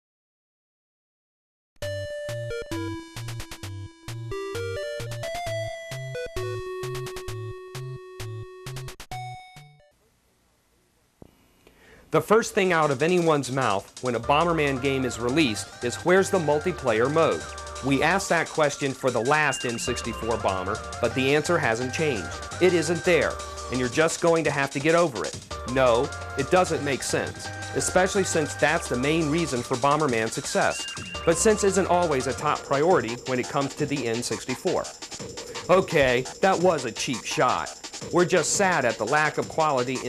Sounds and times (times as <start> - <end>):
Music: 1.8 - 10.1, 12.2 - 40.0
Speech: 12.1 - 34.9, 35.6 - 40.0.